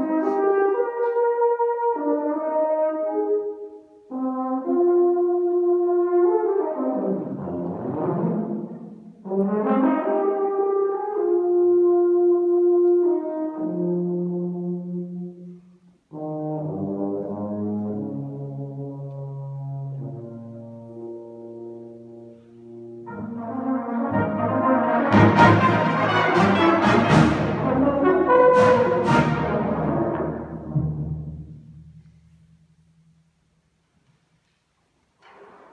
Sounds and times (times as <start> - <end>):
Brass instrument: 0.0 - 31.8
Classical music: 0.0 - 35.7
Orchestra: 0.0 - 35.7.